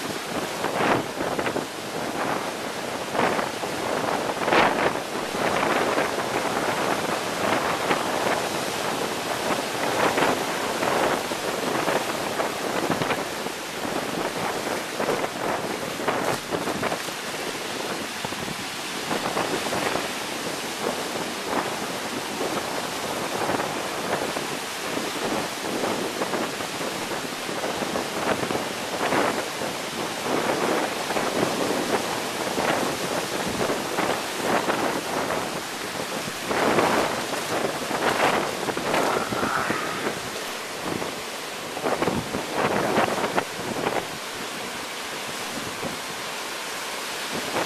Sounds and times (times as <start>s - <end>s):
Waterfall: 0.0s - 47.6s.